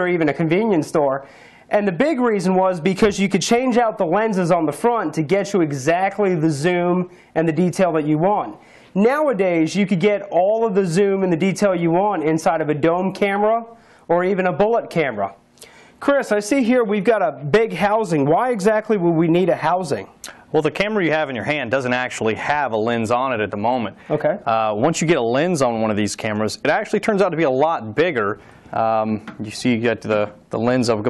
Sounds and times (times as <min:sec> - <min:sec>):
Speech: 0:00.0 - 0:15.4, 0:16.0 - 0:31.0.